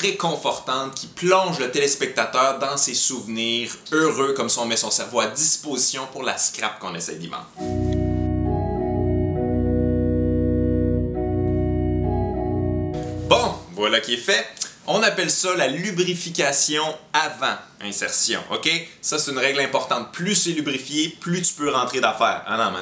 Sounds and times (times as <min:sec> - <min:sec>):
Speech: 0:00.0 - 0:07.6, 0:13.3 - 0:22.8
Music: 0:07.6 - 0:13.7.